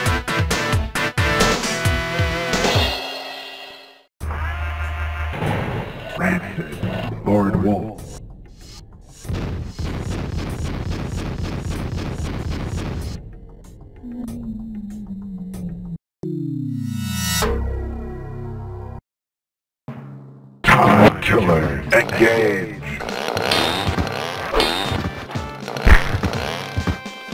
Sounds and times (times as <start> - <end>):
Music: 0.0 - 3.1, 13.0 - 16.0, 17.4 - 19.0, 19.9 - 27.3.